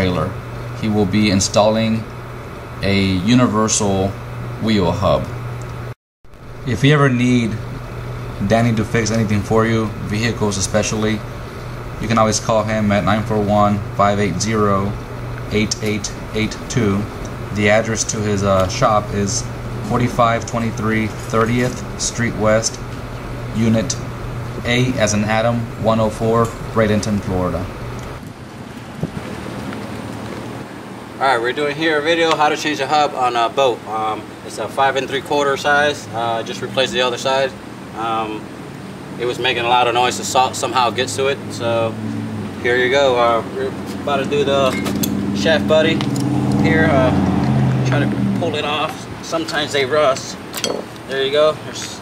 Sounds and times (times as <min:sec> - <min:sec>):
Speech: 0:00.0 - 0:02.1, 0:02.8 - 0:05.3, 0:06.7 - 0:07.6, 0:08.4 - 0:11.2, 0:12.0 - 0:22.8, 0:23.6 - 0:24.0, 0:24.6 - 0:27.7, 0:31.2 - 0:38.5, 0:39.2 - 0:42.0, 0:42.6 - 0:47.2, 0:47.8 - 0:50.4, 0:51.1 - 0:52.0.